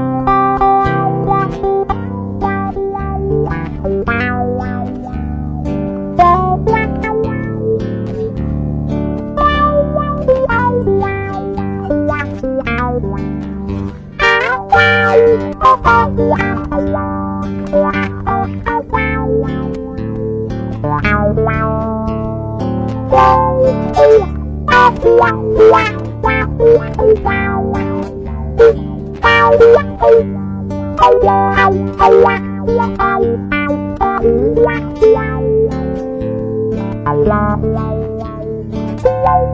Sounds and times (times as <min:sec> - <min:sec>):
Pizzicato: 0:09.4 - 0:20.2, 0:23.1 - 0:35.8, 0:36.9 - 0:39.5.